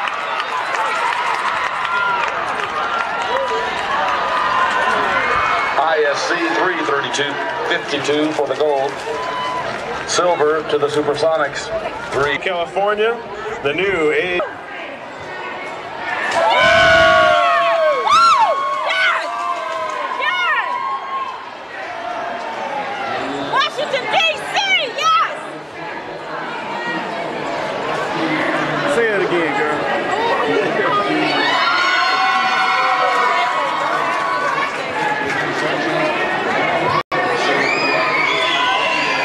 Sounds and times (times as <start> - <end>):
Male speech, man speaking: 5.8 - 9.0, 10.1 - 14.6, 28.2 - 31.5.